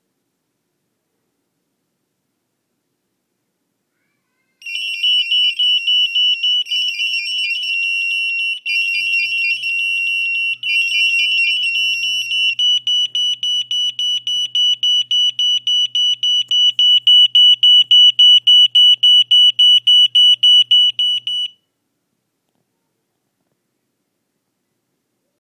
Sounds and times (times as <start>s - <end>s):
Beep, bleep: 12.6s - 21.6s.